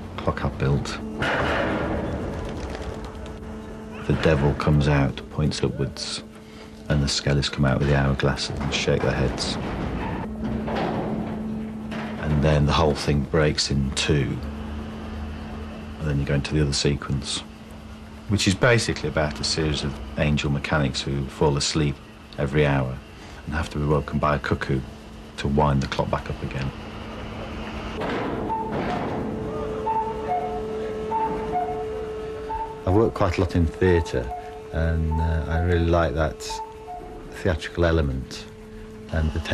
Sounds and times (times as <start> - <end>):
Speech: 0.2 - 1.1, 4.0 - 6.3, 6.9 - 9.6, 12.2 - 14.4, 16.0 - 17.5, 18.3 - 26.8, 32.9 - 36.6, 37.4 - 38.5, 39.1 - 39.5.